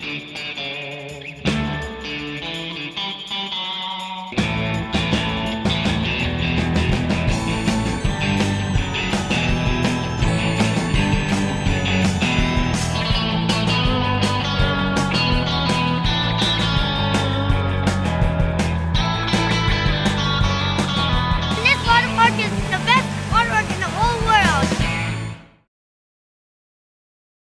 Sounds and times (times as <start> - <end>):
Music: 0.0 - 25.7
Speech: 21.5 - 24.8.